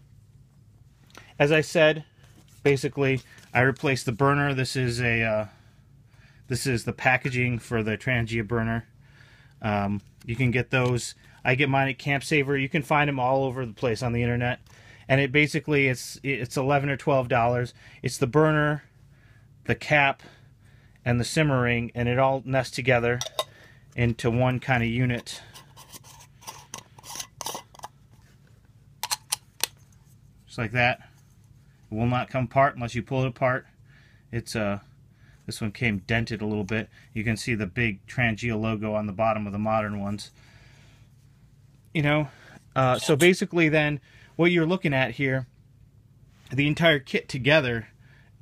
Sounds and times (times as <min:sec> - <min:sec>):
Inside, small room: 0:00.0 - 0:48.4
Speech: 0:01.4 - 0:05.6, 0:06.5 - 0:08.9, 0:09.6 - 0:18.9, 0:19.7 - 0:20.3, 0:21.0 - 0:23.3, 0:24.0 - 0:25.5, 0:30.5 - 0:31.1, 0:31.9 - 0:33.7, 0:34.3 - 0:34.9, 0:35.5 - 0:40.3, 0:41.9 - 0:45.5, 0:46.5 - 0:47.9.